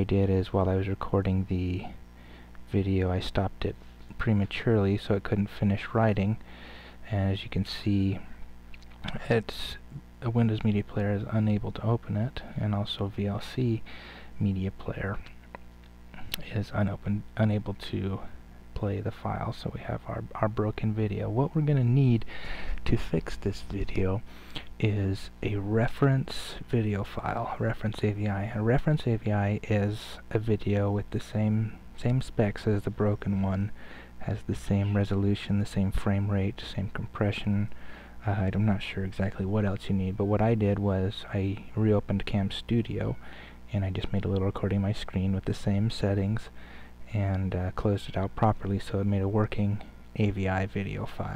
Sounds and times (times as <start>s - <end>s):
Speech: 0.0s - 2.0s, 2.7s - 8.4s, 9.0s - 15.4s, 16.2s - 51.3s.